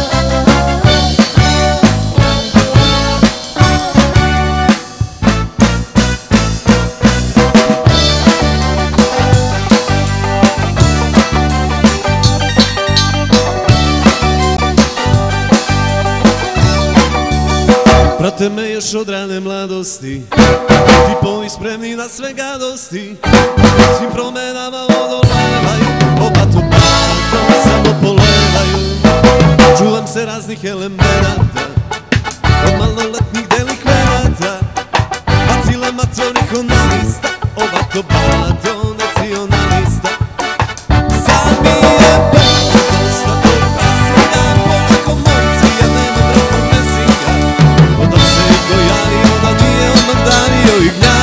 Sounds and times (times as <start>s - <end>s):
Bass drum: 0.0s - 18.4s, 20.4s - 21.4s, 23.3s - 24.2s, 25.1s - 51.2s
Drum kit: 0.0s - 19.0s, 20.2s - 21.9s, 23.2s - 51.2s.